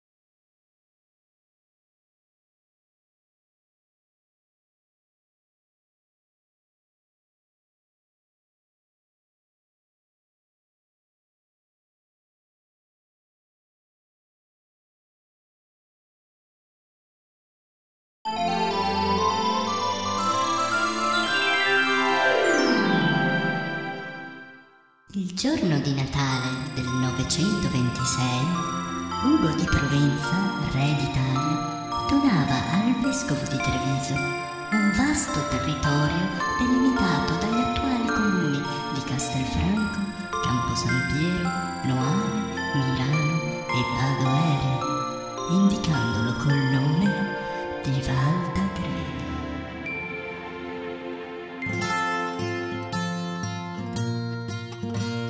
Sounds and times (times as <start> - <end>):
Music: 18.3 - 55.2
Speech: 25.1 - 28.6, 29.2 - 49.4.